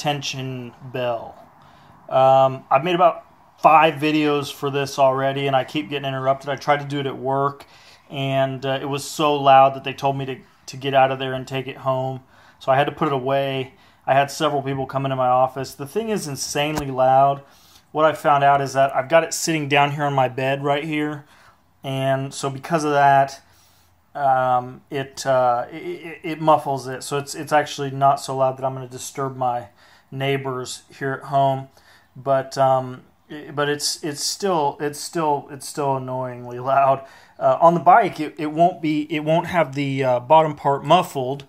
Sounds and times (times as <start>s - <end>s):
Speech: 0.0s - 1.5s, 2.1s - 23.5s, 24.2s - 41.4s.